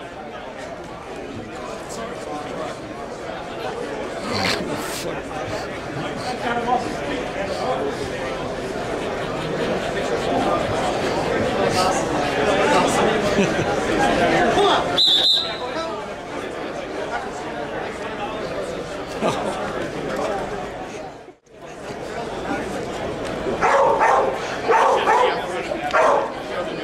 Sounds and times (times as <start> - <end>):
Speech: 0.0 - 26.8.